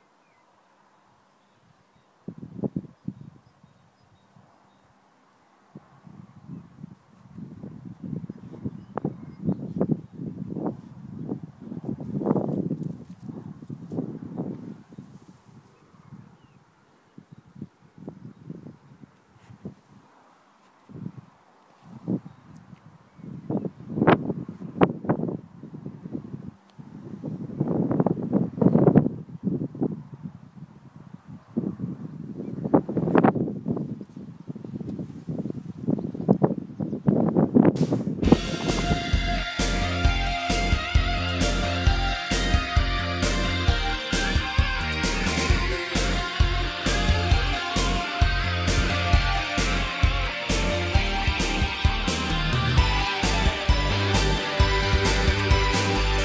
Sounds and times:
Outside, rural or natural: 0.0 - 56.2.

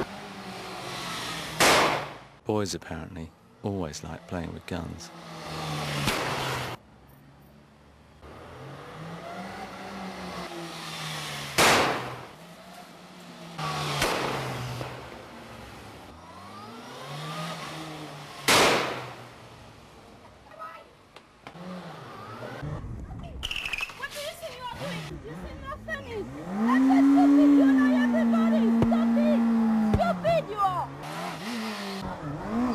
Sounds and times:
Accelerating, revving, vroom: 0.0 - 2.2, 4.1 - 6.8, 8.2 - 19.3, 21.5 - 22.8, 24.7 - 32.7
Medium engine (mid frequency): 0.0 - 32.7
Vehicle: 0.0 - 32.7
Speech: 24.0 - 29.4.

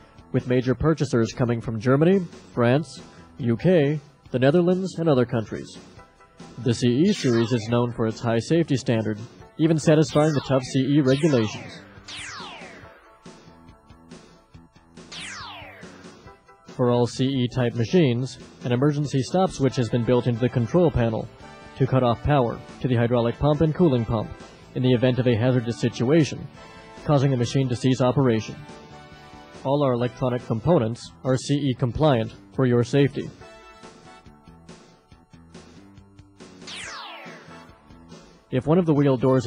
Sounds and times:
Music: 0.0 - 39.4
Speech: 0.4 - 5.8, 6.6 - 11.8, 16.8 - 28.6, 29.6 - 33.4, 38.5 - 39.4.

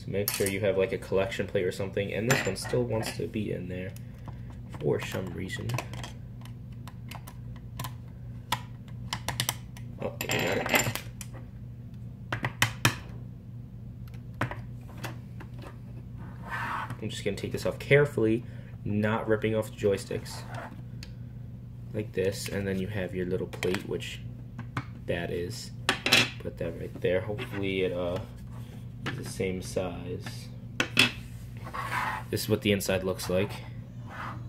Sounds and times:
Speech: 0.0 - 4.0, 4.7 - 5.9, 10.0 - 10.8, 17.0 - 20.5, 21.9 - 24.3, 25.1 - 25.8, 26.4 - 28.3, 29.1 - 30.5, 32.3 - 33.7.

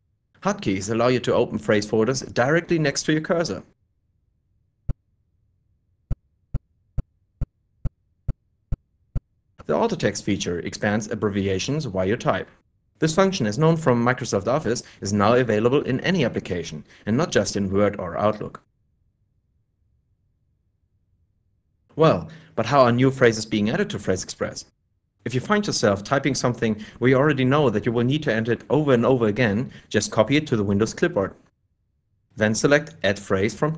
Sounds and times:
Speech: 0.4 - 3.8, 9.6 - 18.7, 21.9 - 31.4, 32.4 - 33.7.

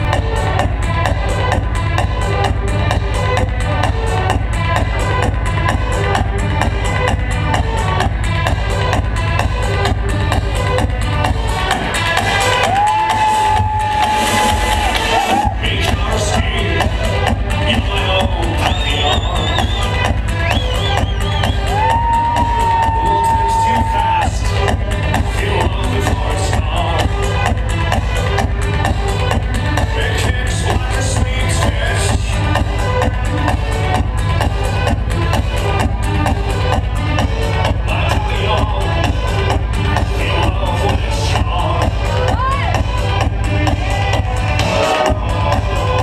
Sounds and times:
Techno: 0.0 - 46.0.

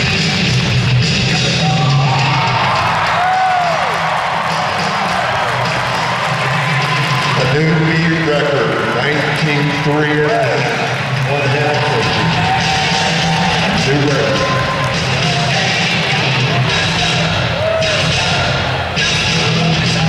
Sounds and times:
Music: 0.0 - 20.0
Speech: 7.4 - 12.3, 13.7 - 14.5.

